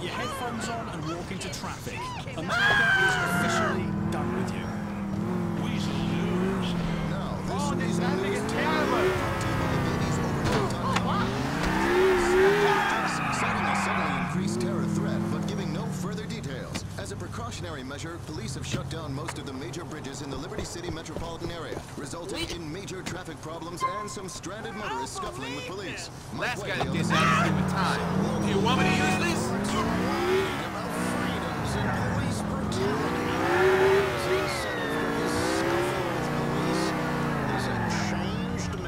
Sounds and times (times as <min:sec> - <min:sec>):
Speech: 0:00.0 - 0:04.8, 0:05.6 - 0:11.4, 0:12.0 - 0:38.8.